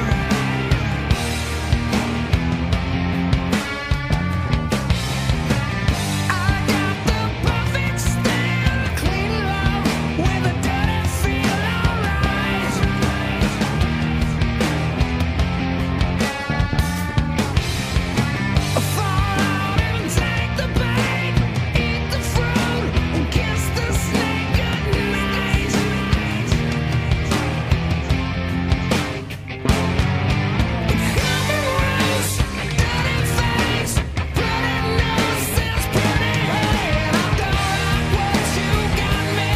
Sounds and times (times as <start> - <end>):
Bass guitar: 0.0 - 39.5.